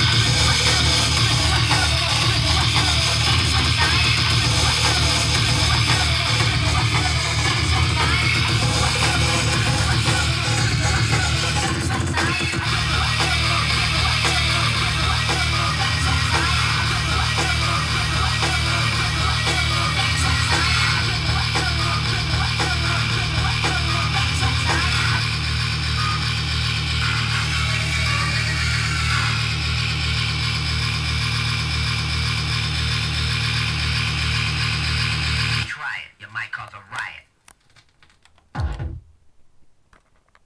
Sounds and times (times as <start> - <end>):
Music: 0.0 - 29.6
Speech: 35.7 - 37.3.